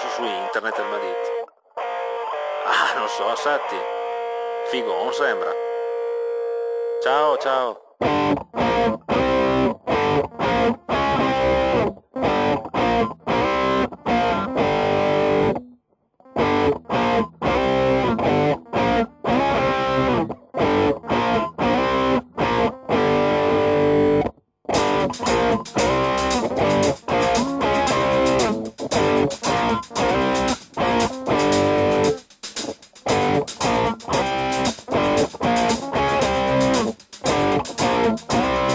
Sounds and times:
Music: 0:00.0 - 0:05.5, 0:08.0 - 0:38.7.

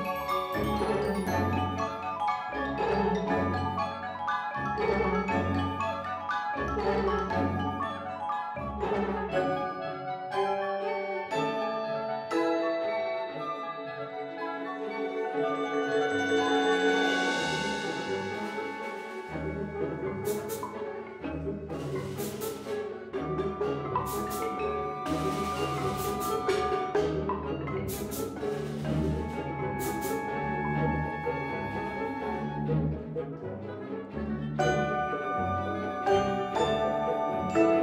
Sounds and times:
Drum roll: 0:24.0 - 0:27.0.

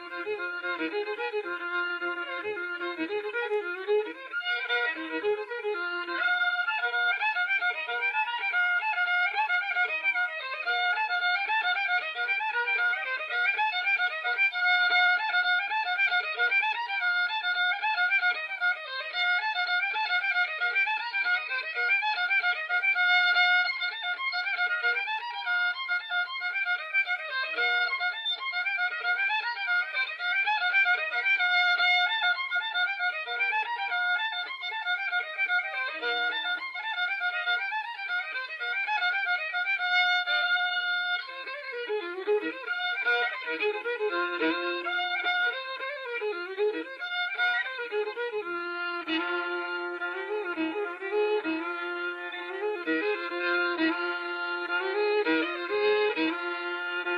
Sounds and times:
Violin, fiddle: 0:00.0 - 0:57.1.

